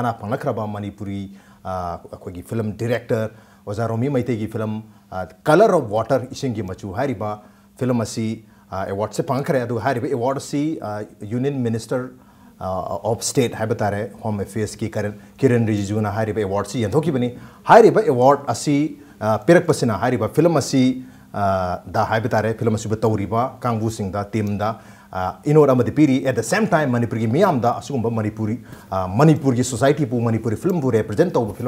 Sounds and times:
Speech: 0.0s - 31.6s.

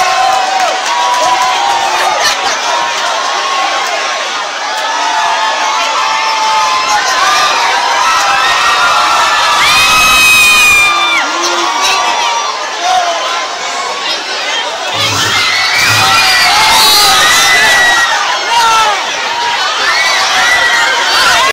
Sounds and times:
Speech: 11.2s - 15.4s.

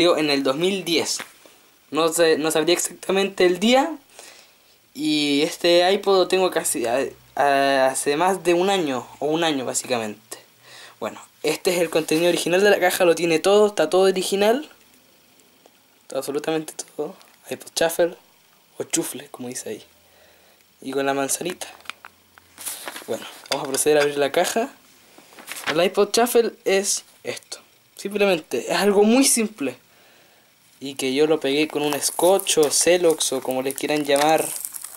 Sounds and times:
Speech: 0.0s - 1.3s, 1.9s - 4.0s, 5.0s - 14.8s, 16.1s - 18.2s, 18.8s - 19.9s, 20.8s - 21.8s, 23.1s - 24.8s, 25.7s - 29.8s, 30.8s - 34.6s.

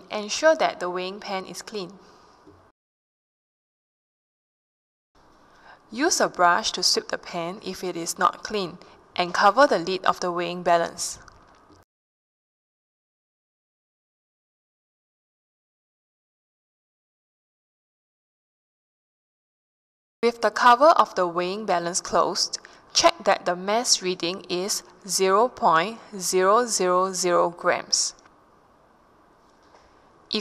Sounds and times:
Speech: 0.0s - 2.0s, 5.9s - 11.2s, 20.2s - 28.2s.

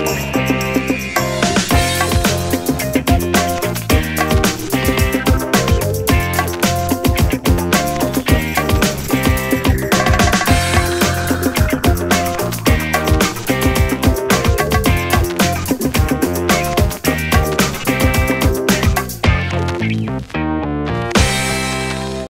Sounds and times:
Music: 0.0s - 22.3s.

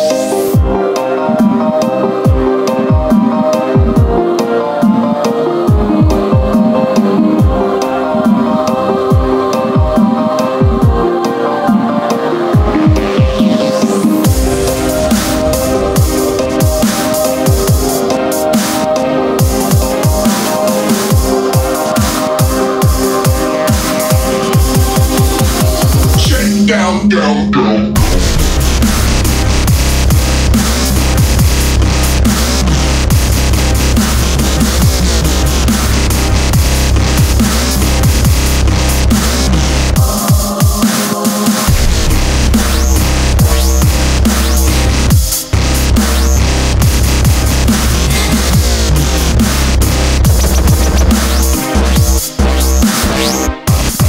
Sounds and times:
Dubstep: 11.7s - 54.0s.

